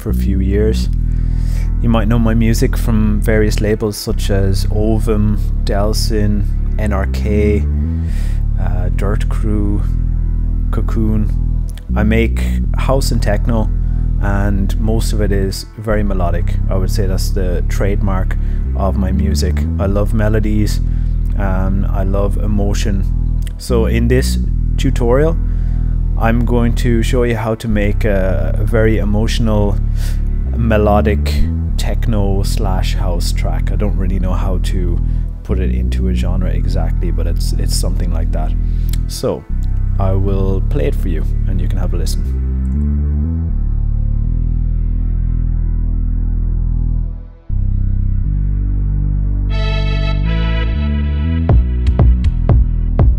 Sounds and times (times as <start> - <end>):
Speech: 0.0 - 1.0, 1.8 - 7.7, 8.6 - 10.0, 10.7 - 25.4, 26.2 - 42.3
Electronic music: 0.0 - 53.1.